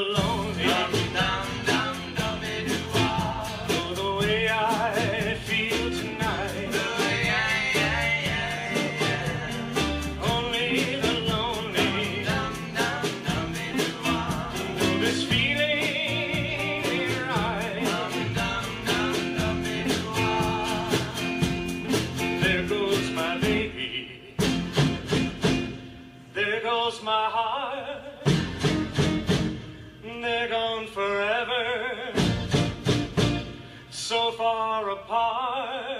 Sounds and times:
Rock and roll: 0:00.0 - 0:26.4, 0:28.0 - 0:35.2.

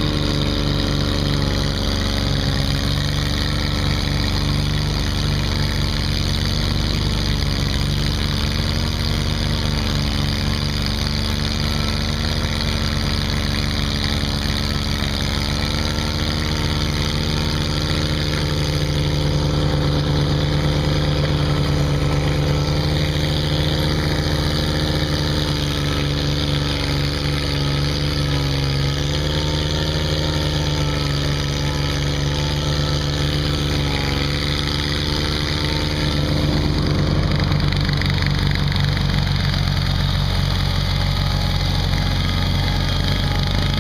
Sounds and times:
Lawn mower: 0:00.0 - 0:43.8
Vehicle: 0:00.0 - 0:43.8.

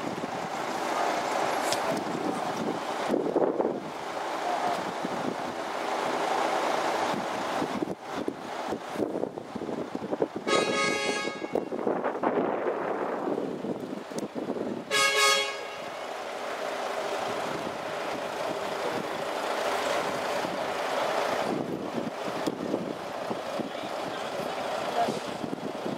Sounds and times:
Truck: 0:00.0 - 0:25.9.

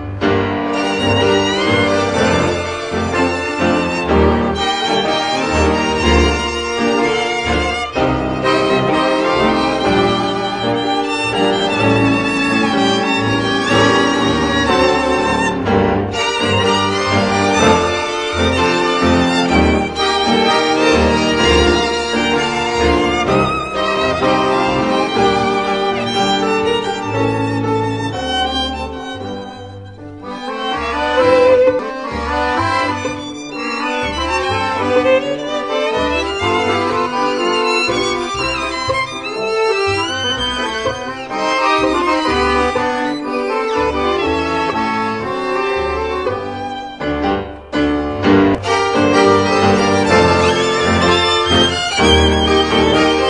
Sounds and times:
Music: 0:00.0 - 0:53.2.

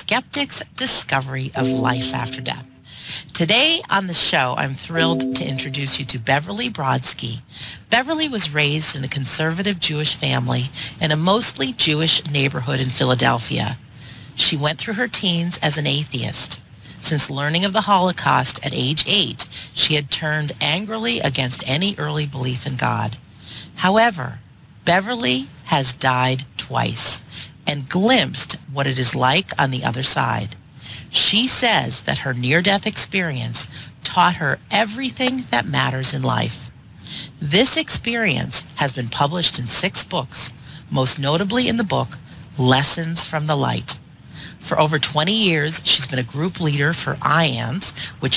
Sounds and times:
Speech: 0:00.0 - 0:48.3.

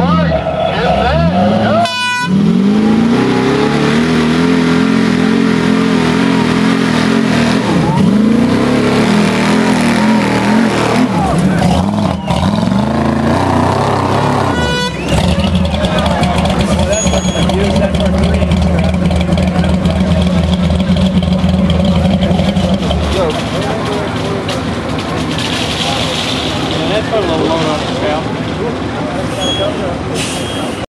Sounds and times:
Truck: 0:00.0 - 0:30.8
Speech: 0:15.7 - 0:20.6, 0:22.1 - 0:24.8, 0:25.7 - 0:30.8.

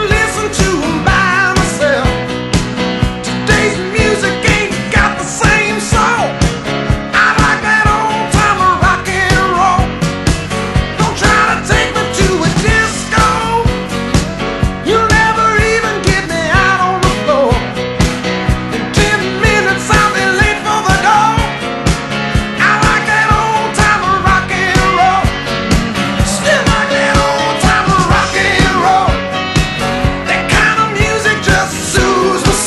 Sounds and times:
Rock and roll: 0:00.0 - 0:32.6.

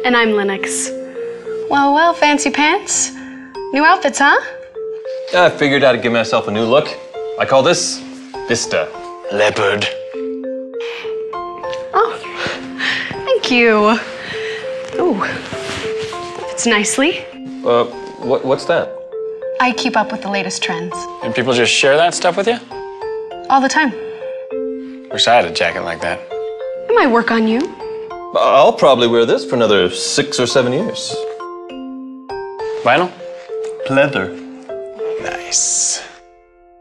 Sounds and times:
Music: 0:00.0 - 0:36.8.

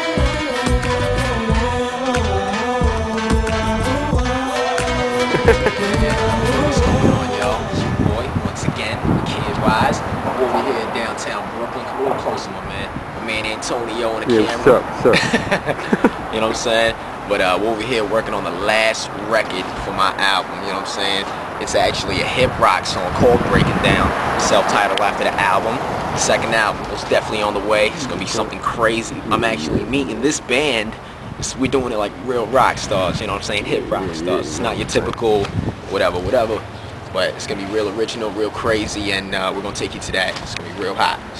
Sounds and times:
Music: 0:00.0 - 0:08.2
Speech: 0:07.4 - 0:15.2, 0:16.3 - 0:41.4.

